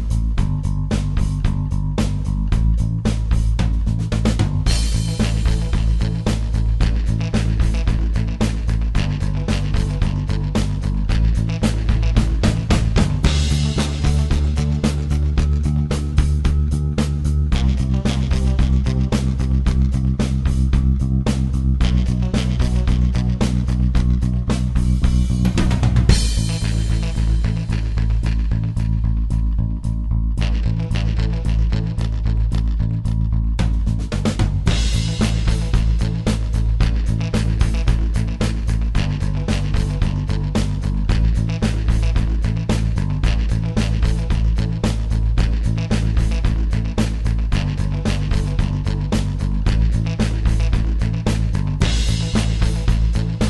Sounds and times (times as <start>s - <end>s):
Music: 0.0s - 53.5s.